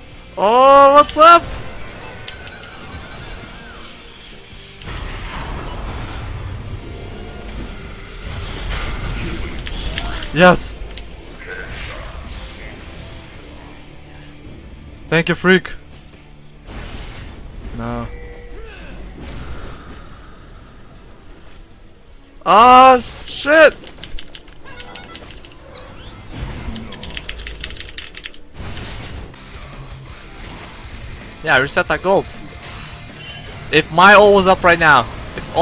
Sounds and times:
Music: 0.0s - 35.6s.

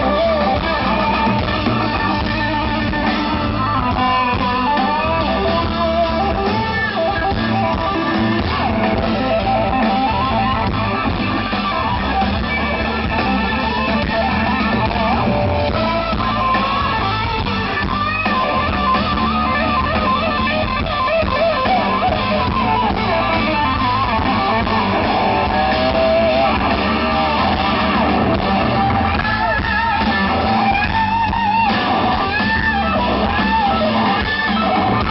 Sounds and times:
Music: 0.0s - 35.1s.

